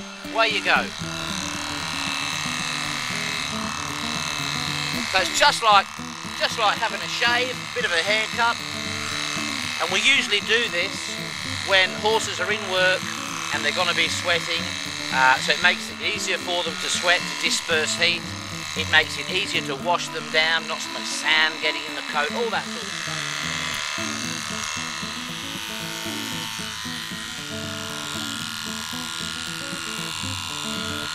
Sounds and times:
Music: 0.0 - 31.1
Speech: 0.4 - 0.9, 5.1 - 8.6, 9.8 - 18.2, 18.8 - 22.8.

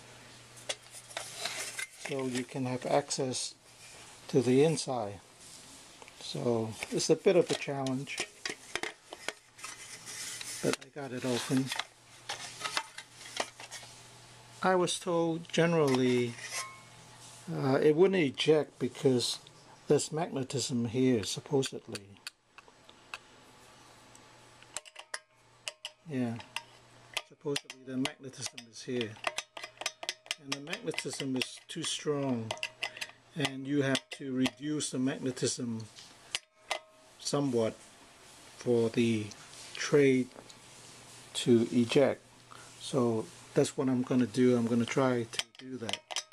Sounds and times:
Inside, small room: 0.0 - 46.3
Speech: 2.1 - 3.6, 4.3 - 5.2, 6.2 - 8.2, 10.6 - 11.8, 14.6 - 16.4, 17.5 - 22.2, 26.1 - 26.5, 27.3 - 29.2, 30.4 - 32.6, 33.4 - 35.9, 37.2 - 37.8, 38.6 - 40.4, 41.4 - 42.2, 42.8 - 46.0.

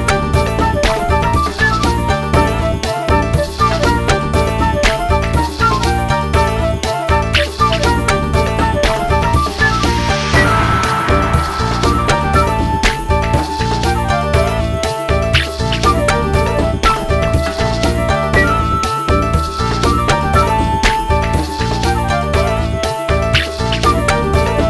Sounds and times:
Music: 0.0 - 24.7.

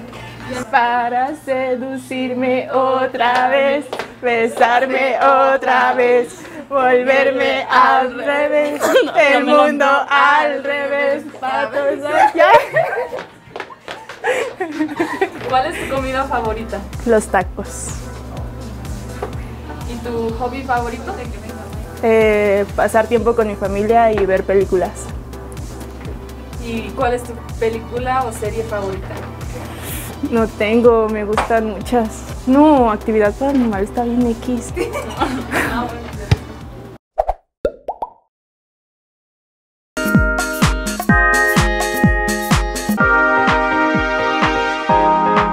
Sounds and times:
Female speech, woman speaking: 0.4 - 1.4, 7.3 - 12.9, 15.4 - 18.0, 19.7 - 25.1, 26.6 - 29.2, 30.2 - 36.5
Music: 15.3 - 37.0, 40.0 - 45.5.

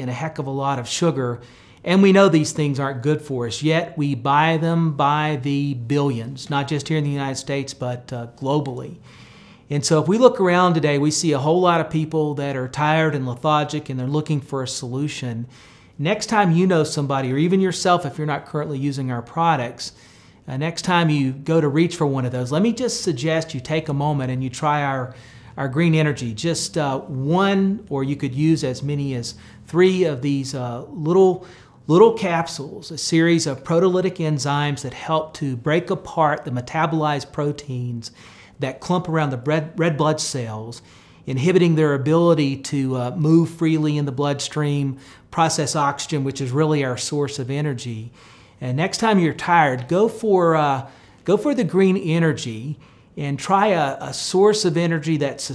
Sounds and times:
Speech: 0.0 - 9.0, 9.7 - 55.5.

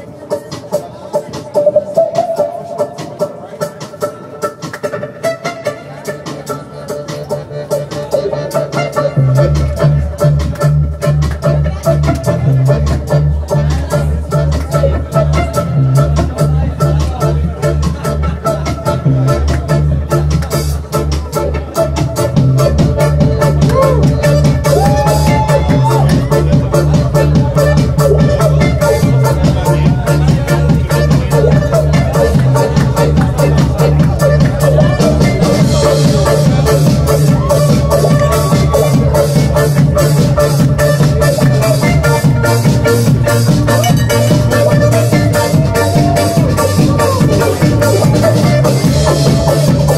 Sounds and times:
Music: 0.0 - 49.9.

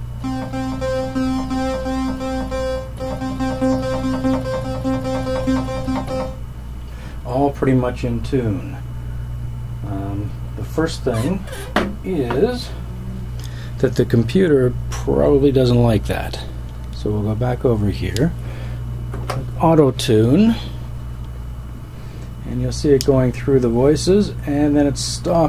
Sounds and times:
Music: 0.2 - 6.4
Speech: 7.3 - 8.8, 9.8 - 12.8, 13.8 - 18.4, 19.6 - 20.7, 22.4 - 25.4.

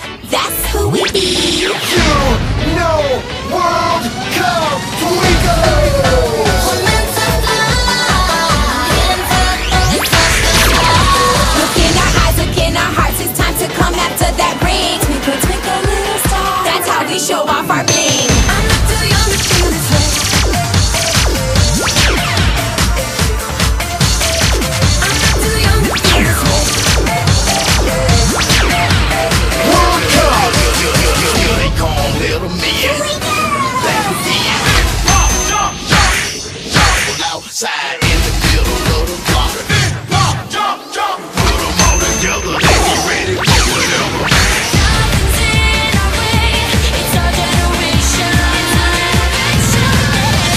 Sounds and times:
Music: 0.0 - 50.5.

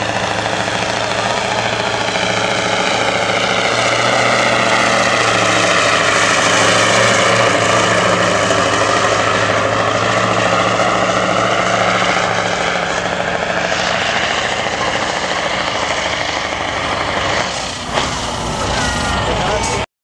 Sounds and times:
Truck: 0.0 - 19.9.

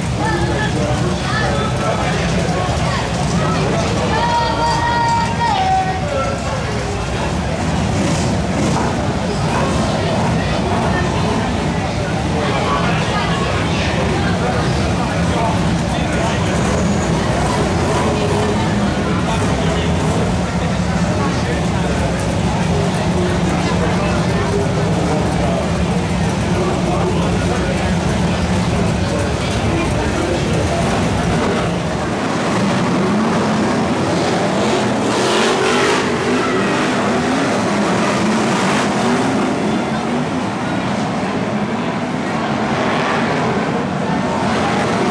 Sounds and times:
Speech: 0.0 - 45.1
Vehicle: 0.0 - 45.1.

